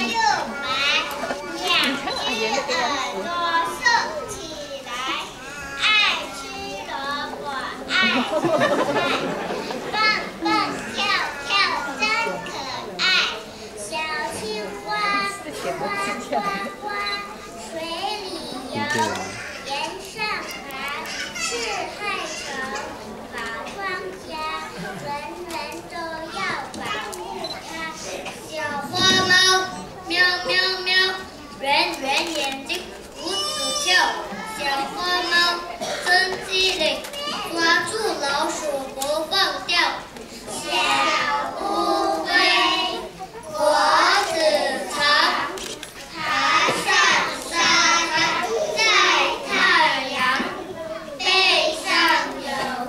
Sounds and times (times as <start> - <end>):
Child speech, kid speaking: 0.0 - 52.8
Female speech, woman speaking: 15.1 - 16.7
Male speech, man speaking: 18.8 - 19.4.